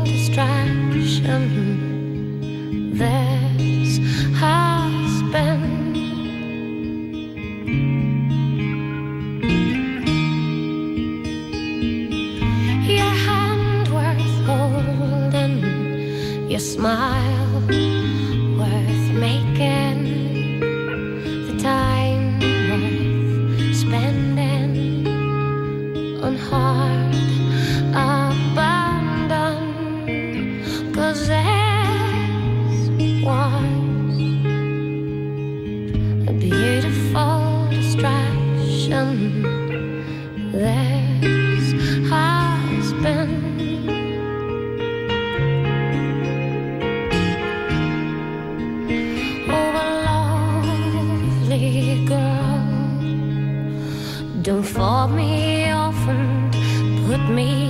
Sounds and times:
Independent music: 0.0s - 57.6s.

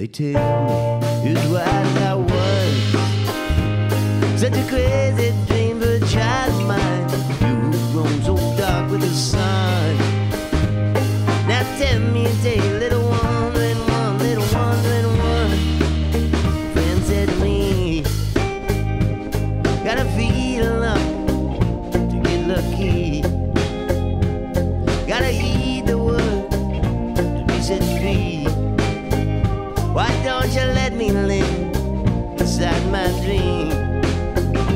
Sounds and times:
Blues: 0.0s - 34.7s.

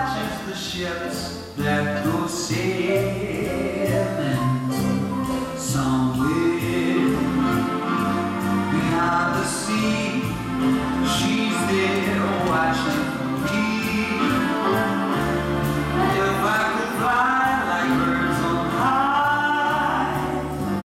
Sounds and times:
Music: 0.0s - 20.8s.

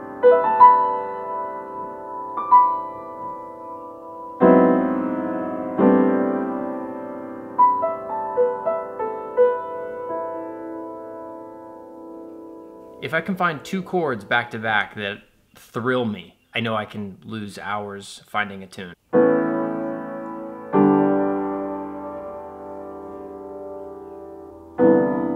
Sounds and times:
Music: 0.0s - 13.7s, 19.1s - 25.3s
Speech: 13.0s - 19.0s.

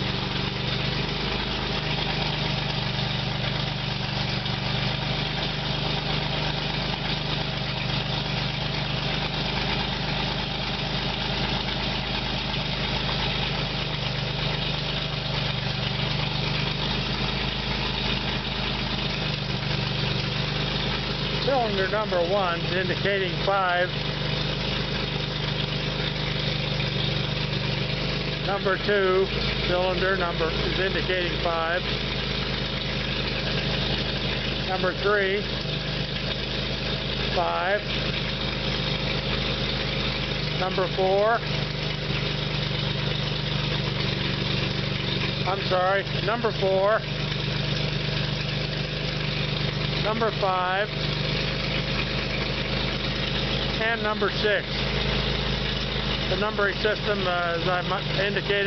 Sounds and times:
Engine: 0.0s - 58.6s
Speech: 21.4s - 24.0s, 28.4s - 31.9s, 34.7s - 35.5s, 37.3s - 37.9s, 40.6s - 41.5s, 45.4s - 47.1s, 50.0s - 50.9s, 53.8s - 54.7s, 56.3s - 58.6s.

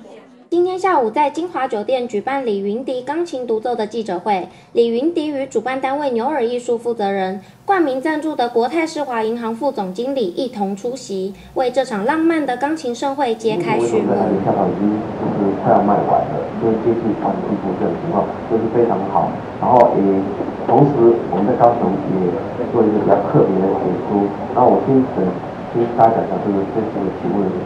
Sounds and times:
Speech: 0.0s - 27.6s.

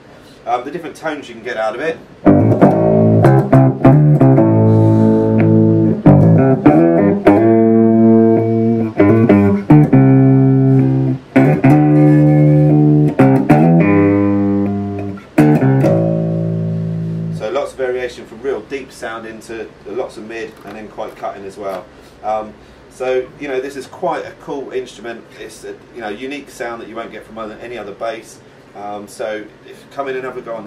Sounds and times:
Bass guitar: 2.2s - 17.6s.

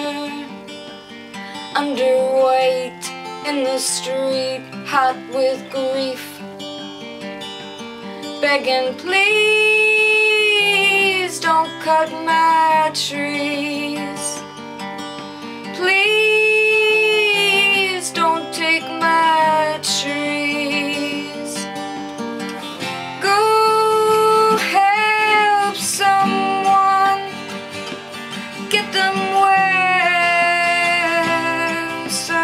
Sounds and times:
Music: 0.0s - 32.4s
Singing: 8.4s - 14.4s, 15.8s - 21.7s, 23.2s - 27.5s, 28.6s - 32.4s.

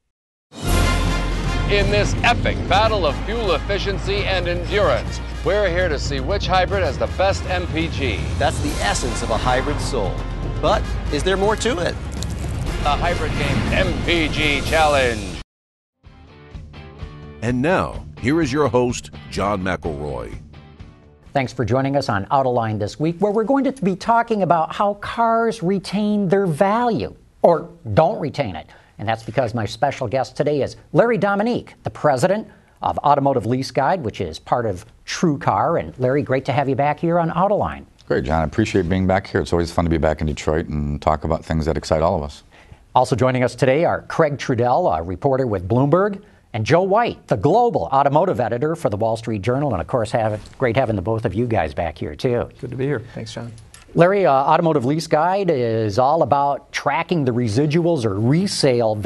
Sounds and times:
Music: 0.5s - 15.4s, 16.0s - 23.2s
Speech: 1.7s - 12.0s, 17.4s - 20.4s, 21.4s - 42.4s, 43.0s - 59.0s.

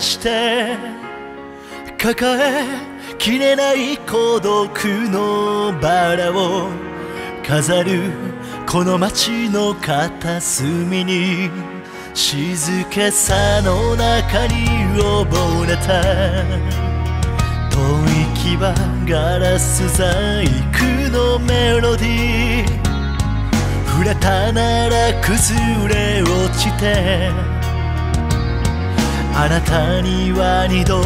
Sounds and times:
Music: 0.0s - 31.0s.

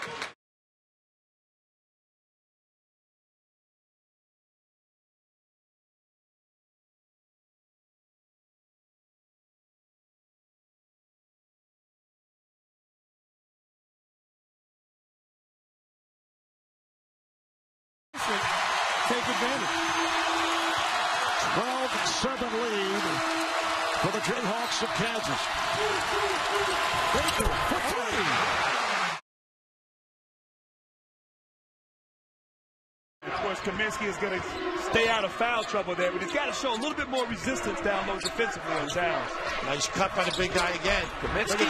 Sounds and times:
Speech: 19.1s - 19.7s, 21.4s - 23.2s, 24.0s - 25.5s, 33.3s - 41.6s.

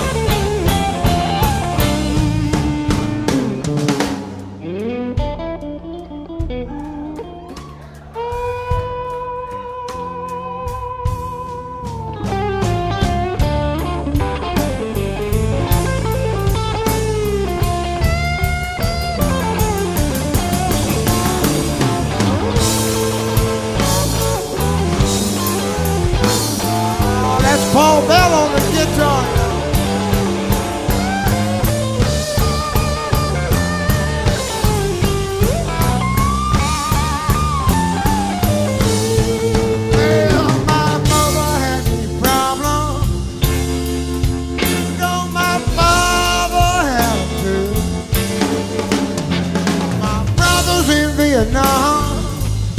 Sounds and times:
Jazz: 0.0s - 52.7s
Psychedelic rock: 0.0s - 52.7s.

